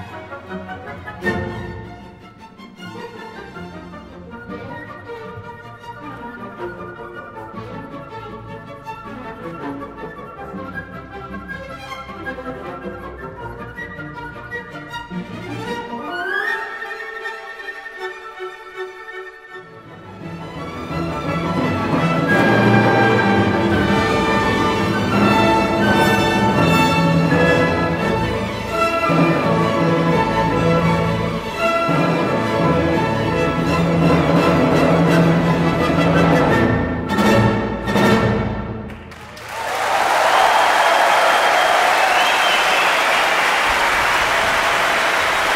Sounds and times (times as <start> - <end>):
Music: 0.0 - 43.6.